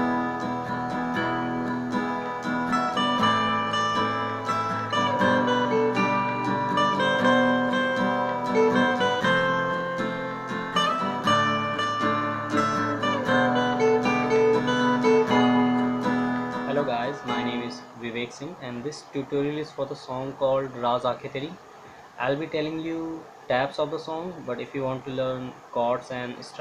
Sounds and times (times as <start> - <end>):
Guitar: 0.0 - 26.6
Speech: 16.7 - 21.6, 22.2 - 26.6.